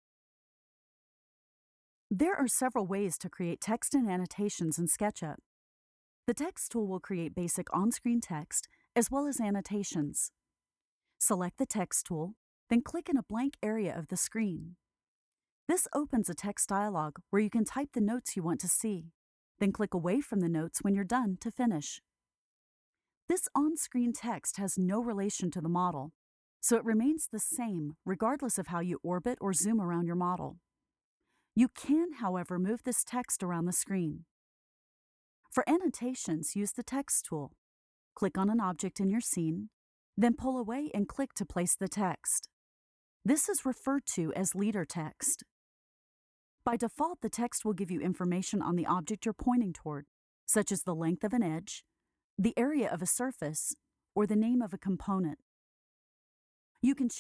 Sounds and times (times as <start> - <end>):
Speech: 2.1 - 5.5, 6.3 - 10.3, 11.2 - 14.8, 15.7 - 22.0, 23.3 - 30.6, 31.6 - 34.3, 35.5 - 37.6, 38.2 - 42.6, 43.3 - 45.5, 46.7 - 55.4, 56.8 - 57.2.